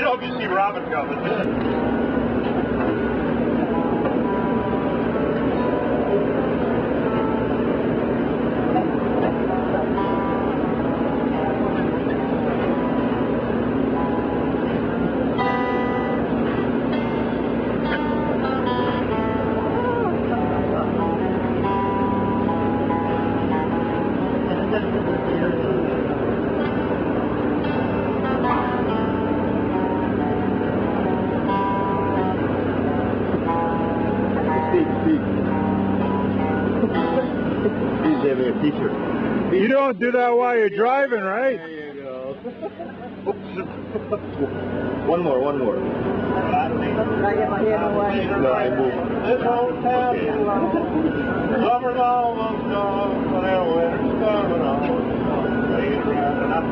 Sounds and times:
Bus: 0.0 - 56.7
Music: 2.8 - 39.3.

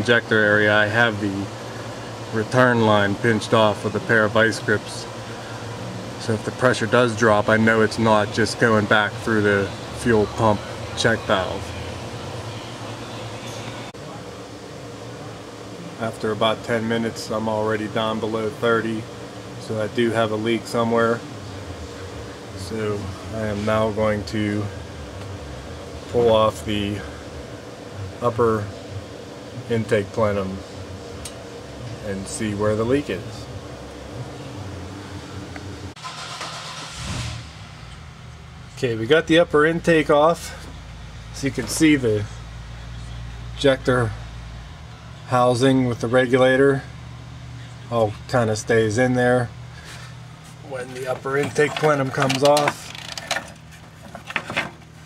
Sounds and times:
Speech: 0.0 - 1.5, 2.3 - 5.1, 6.2 - 11.8, 16.0 - 21.3, 22.6 - 24.8, 26.1 - 27.2, 28.2 - 28.8, 29.6 - 30.7, 32.0 - 33.5, 38.7 - 40.7, 41.4 - 42.4, 43.0 - 44.2, 45.3 - 46.9, 47.6 - 49.6, 50.6 - 52.9.

